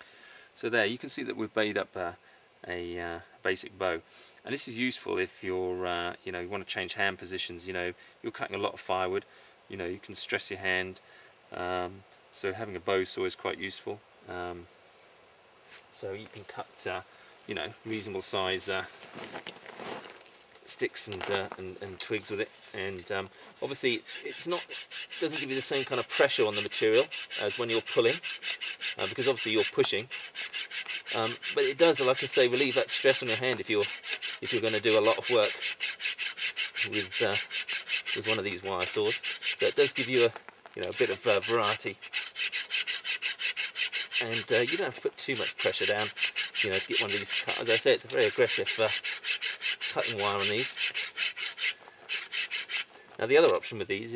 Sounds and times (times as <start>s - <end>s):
Wood: 21.0s - 53.7s
Sawing: 21.8s - 53.6s.